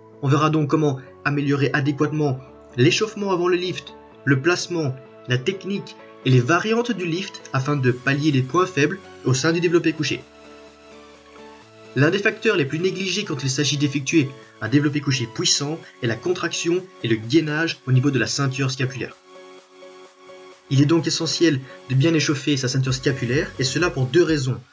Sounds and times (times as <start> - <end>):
Music: 0.0 - 24.7
Speech: 0.2 - 10.2, 12.0 - 19.2, 20.7 - 24.7.